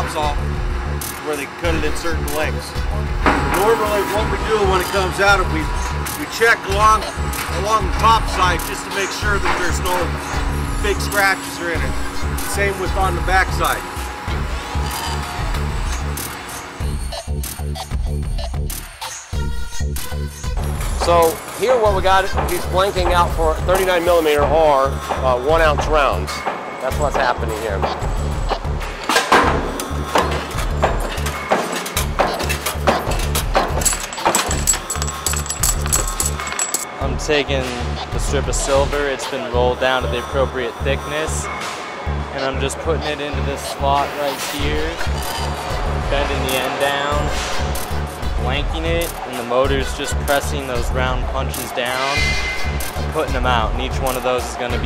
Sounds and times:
Speech: 0.0s - 0.4s, 1.2s - 2.7s, 3.5s - 10.2s, 10.8s - 13.8s, 21.0s - 27.8s, 37.0s - 41.5s, 42.4s - 45.0s, 46.1s - 47.3s, 48.4s - 52.2s, 53.1s - 54.8s
Music: 0.0s - 54.8s.

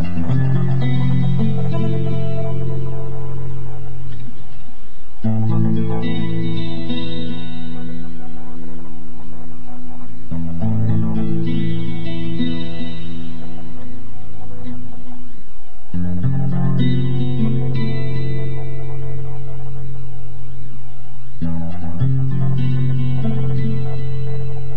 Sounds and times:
Music: 0.0s - 24.7s.

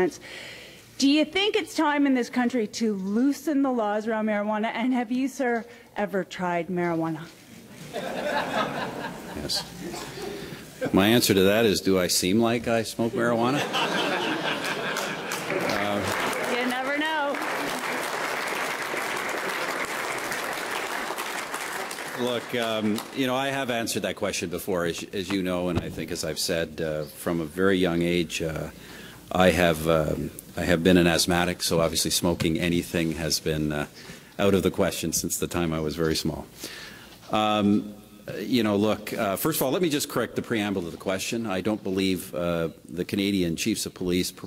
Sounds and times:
Applause: 14.6s - 23.6s.

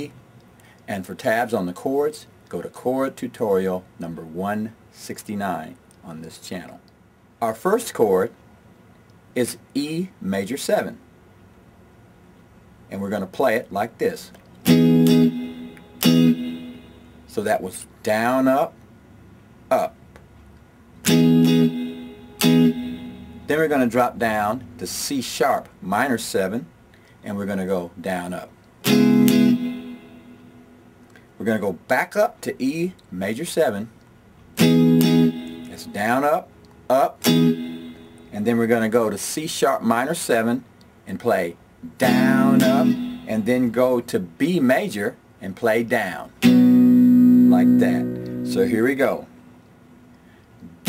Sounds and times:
Tapping (guitar technique): 14.3s - 17.1s, 21.0s - 24.8s, 28.8s - 30.6s, 34.6s - 38.3s, 41.9s - 43.7s, 46.4s - 49.2s
Electric guitar: 14.6s - 16.8s, 21.0s - 23.5s, 28.8s - 30.5s, 34.6s - 36.0s, 37.2s - 38.3s, 41.9s - 43.5s, 46.4s - 48.9s.

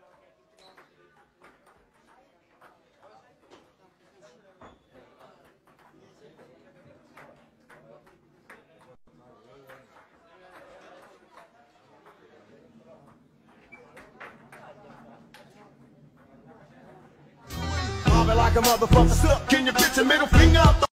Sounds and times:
Speech: 0.0s - 17.5s
Music: 17.5s - 20.9s.

